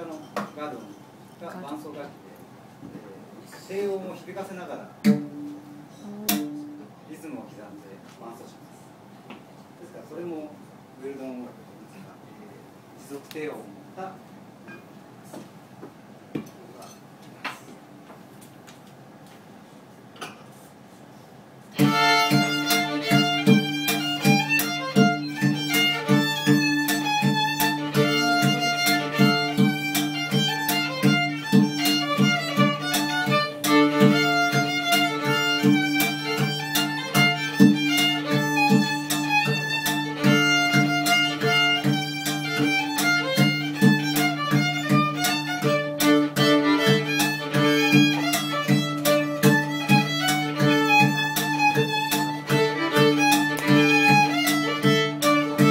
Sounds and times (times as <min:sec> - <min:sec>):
Speech: 0:00.0 - 0:05.0, 0:06.0 - 0:08.9, 0:09.8 - 0:14.2
Violin, fiddle: 0:21.7 - 0:55.7.